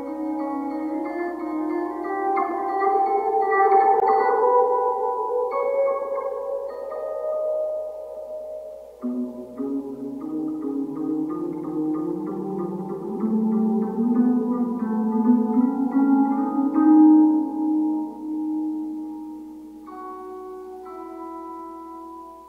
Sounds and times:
Music: 0:00.0 - 0:22.4.

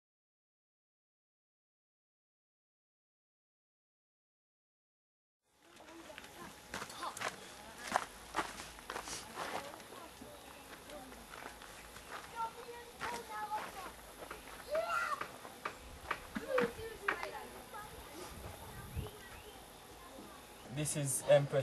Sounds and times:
Walk, footsteps: 0:05.7 - 0:10.0.

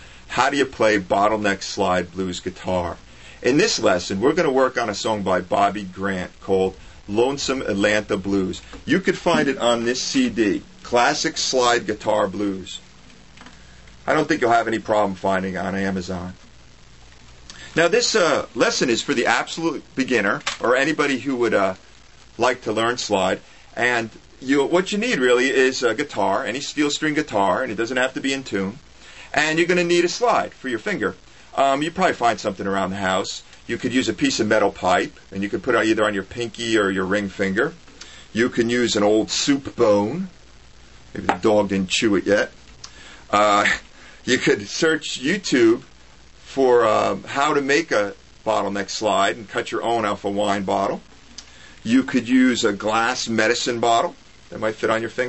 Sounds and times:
Speech: 0:00.3 - 0:12.8, 0:14.0 - 0:16.4, 0:17.8 - 0:21.8, 0:22.4 - 0:40.4, 0:41.1 - 0:42.6, 0:43.3 - 0:45.9, 0:46.5 - 0:51.1, 0:51.8 - 0:55.2.

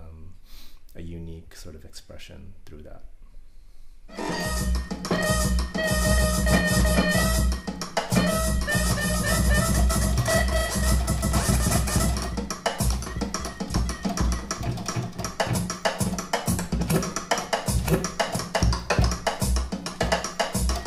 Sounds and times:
Scratching (performance technique): 0:04.1 - 0:20.8.

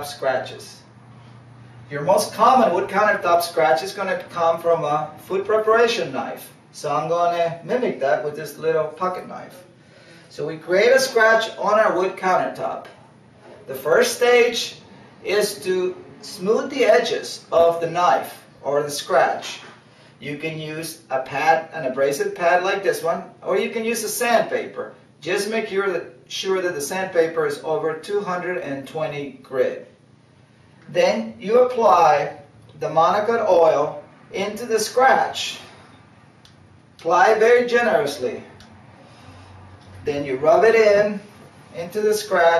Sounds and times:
Speech: 0:00.0 - 0:00.9, 0:01.9 - 0:13.0, 0:13.6 - 0:29.9, 0:30.9 - 0:35.8, 0:37.0 - 0:38.6, 0:40.0 - 0:42.5.

